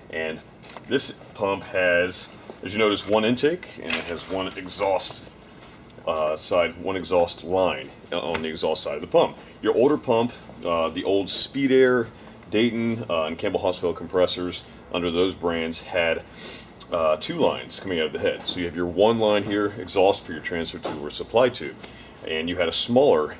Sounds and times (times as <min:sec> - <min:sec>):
Speech: 0:00.1 - 0:05.3, 0:06.0 - 0:23.3.